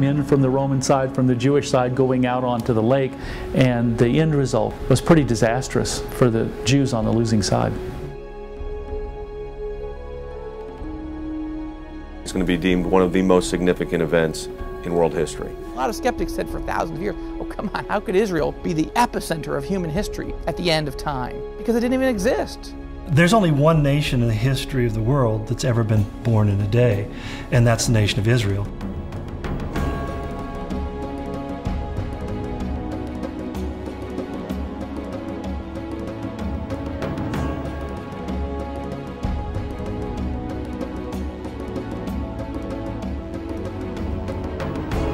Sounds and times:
Music: 0.0s - 45.1s
Speech: 12.3s - 28.7s.

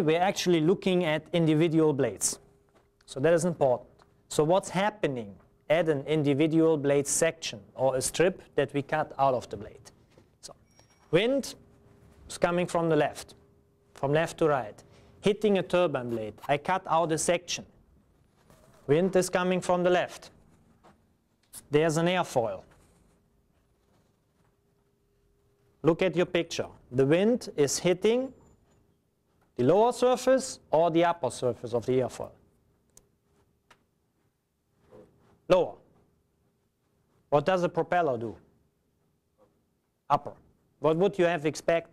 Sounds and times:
Speech: 0.0s - 2.4s, 3.1s - 11.6s, 12.3s - 13.4s, 14.0s - 17.7s, 18.9s - 20.3s, 21.6s - 22.7s, 25.8s - 28.4s, 29.6s - 32.4s, 34.9s - 35.8s, 37.3s - 38.5s, 40.1s - 41.9s.

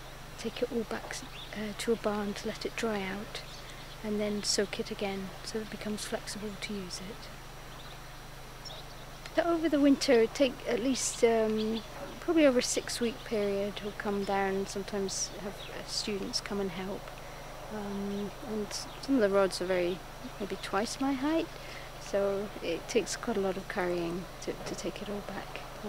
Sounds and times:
Speech: 0.4s - 7.3s, 9.3s - 17.1s, 17.7s - 25.8s.

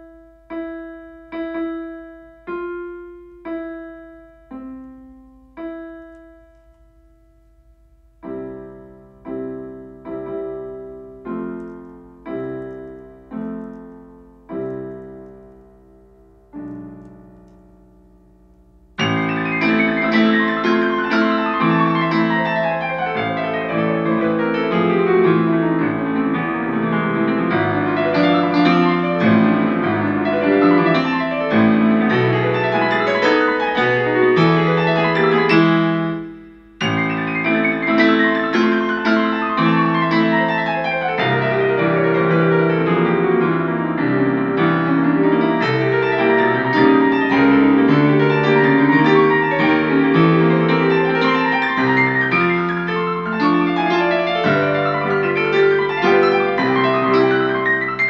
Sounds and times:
Music: 0.0s - 58.1s.

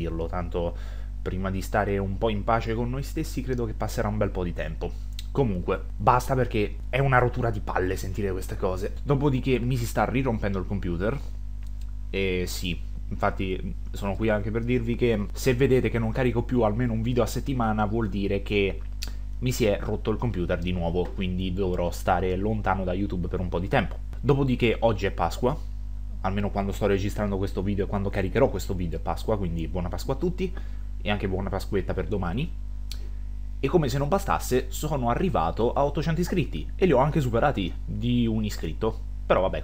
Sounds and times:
Speech: 0.0s - 11.4s, 12.1s - 32.6s, 33.6s - 39.6s.

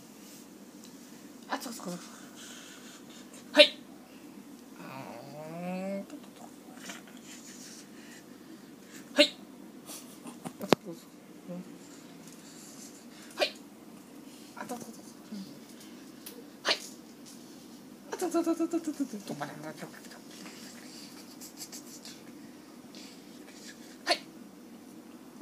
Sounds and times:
Speech: 18.1s - 20.2s.

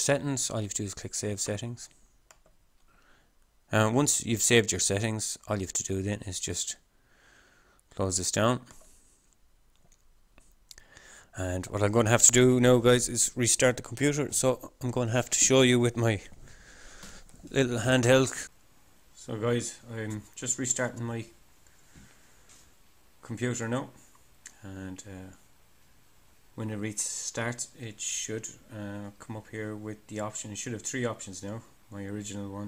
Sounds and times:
Speech: 0.0s - 2.0s, 3.7s - 6.8s, 7.9s - 8.8s, 11.4s - 16.3s, 17.5s - 18.5s, 19.2s - 21.4s, 23.2s - 25.4s, 26.6s - 32.6s
Clicking: 2.3s - 3.0s.

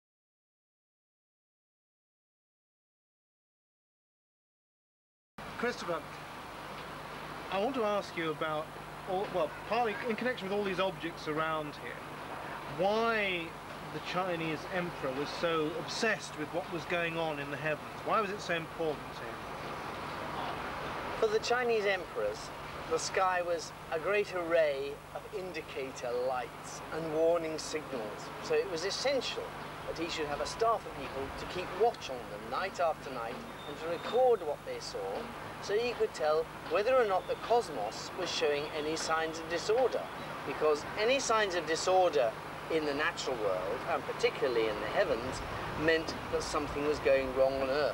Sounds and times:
Speech: 5.6s - 6.1s, 7.5s - 12.0s, 12.7s - 19.4s, 21.2s - 47.9s.

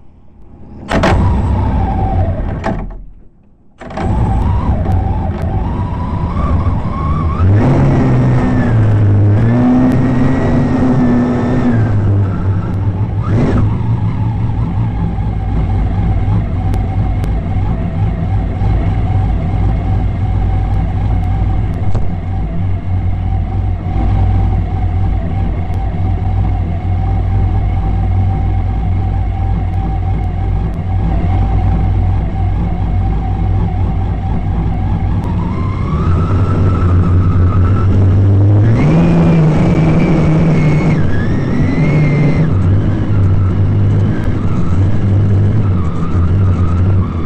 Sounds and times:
Motorboat, speedboat: 0.6s - 3.0s, 3.8s - 47.2s.

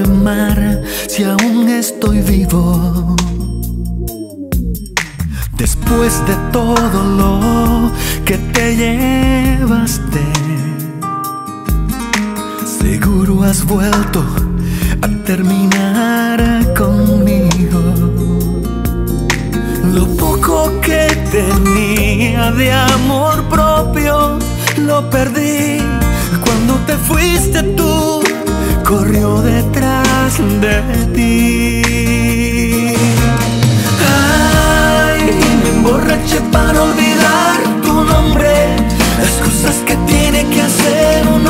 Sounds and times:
Music: 0.0s - 41.4s.

